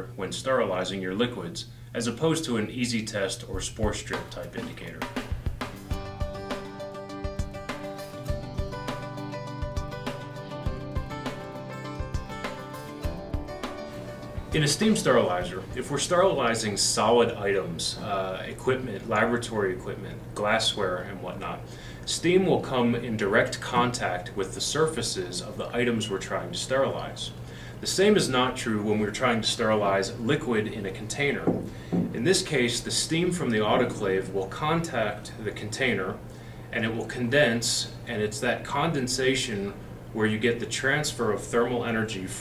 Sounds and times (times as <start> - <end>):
Speech: 0.0 - 5.2, 14.6 - 42.4.